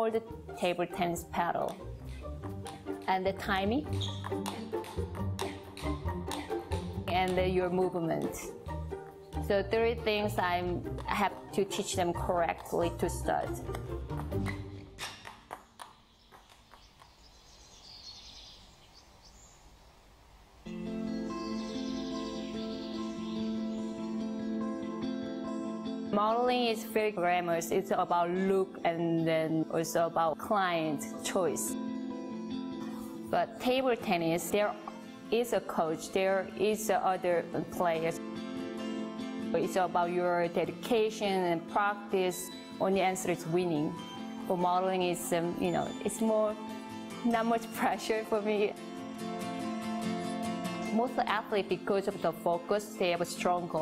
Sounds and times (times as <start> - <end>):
Environmental noise: 15.0 - 24.1
Chirp, tweet: 15.9 - 19.7, 21.2 - 24.1.